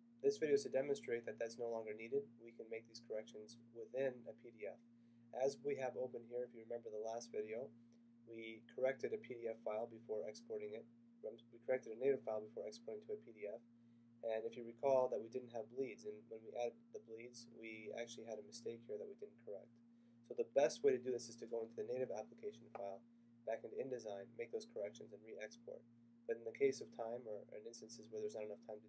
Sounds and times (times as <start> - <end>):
Speech: 0.2 - 4.8, 5.4 - 7.7, 8.3 - 13.6, 14.2 - 19.7, 20.3 - 28.8.